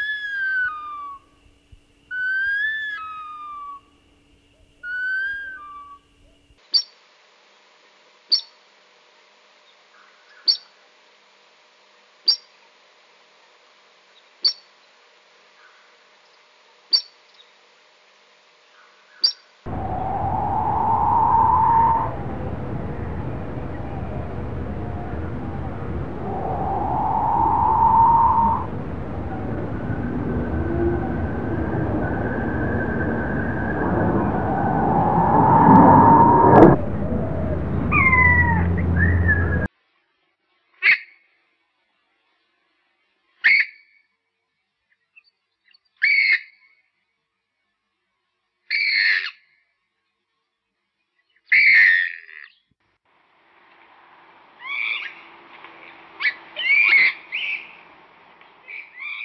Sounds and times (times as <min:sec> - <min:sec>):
Bird vocalization, bird call, bird song: 0:00.0 - 0:01.2, 0:09.7 - 0:10.7, 0:18.7 - 0:19.5, 0:44.9 - 0:46.8, 0:50.1 - 0:52.7, 0:54.6 - 0:55.3, 0:56.2 - 0:57.8, 0:58.5 - 0:59.2.